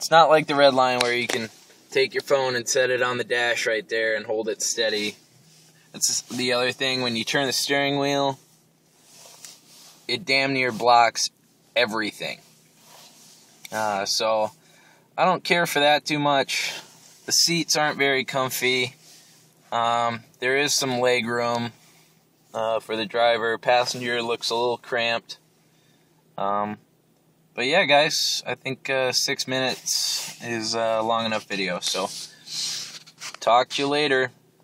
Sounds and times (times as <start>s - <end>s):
Speech: 0.0s - 5.2s, 6.0s - 8.4s, 10.1s - 12.4s, 13.7s - 14.5s, 15.2s - 19.0s, 19.7s - 21.8s, 22.5s - 25.4s, 26.4s - 26.8s, 27.6s - 32.3s, 33.4s - 34.4s.